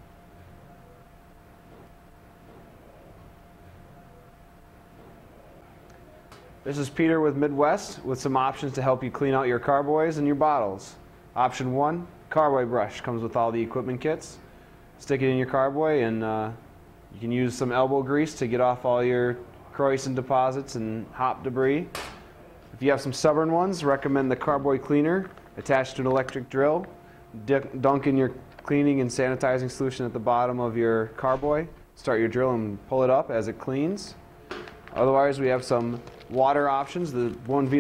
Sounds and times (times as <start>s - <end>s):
Speech: 6.1s - 14.4s, 15.0s - 16.6s, 17.2s - 21.9s, 22.7s - 34.2s, 35.0s - 37.8s.